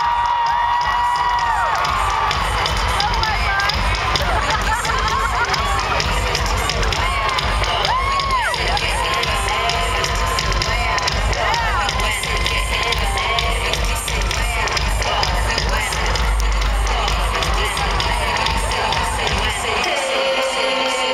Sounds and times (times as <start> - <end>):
Music: 0.0 - 21.1.